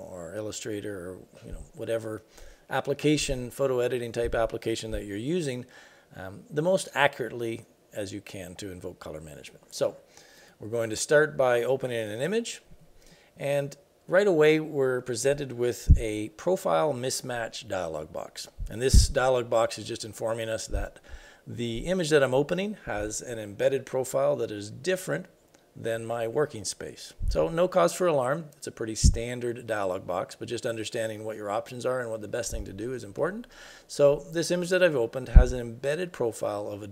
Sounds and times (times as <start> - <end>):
Speech: 0.0 - 10.0, 10.6 - 12.7, 13.4 - 36.9.